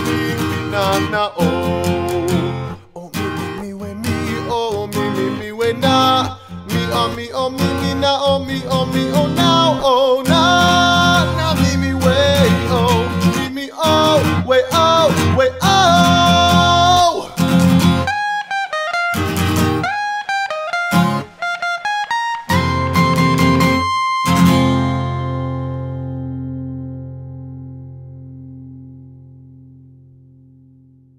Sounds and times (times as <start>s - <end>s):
Acoustic guitar: 0.0s - 31.1s.